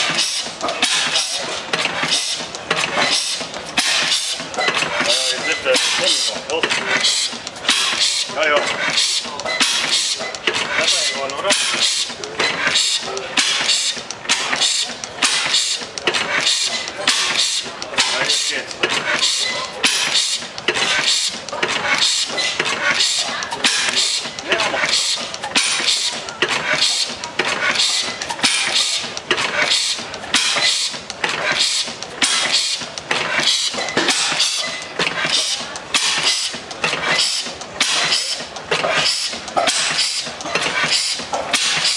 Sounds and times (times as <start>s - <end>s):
Medium engine (mid frequency): 0.0s - 41.9s
Speech: 5.0s - 7.1s, 8.3s - 9.6s, 10.3s - 12.4s, 17.4s - 20.3s, 22.8s - 27.5s.